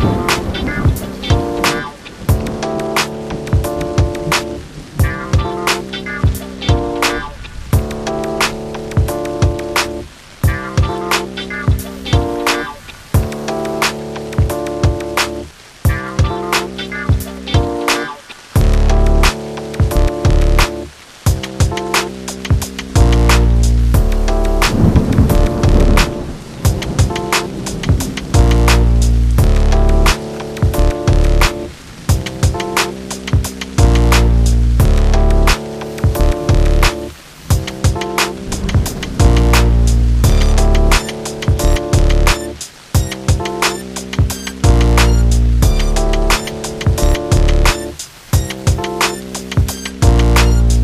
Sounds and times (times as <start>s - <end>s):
Music: 0.0s - 50.8s.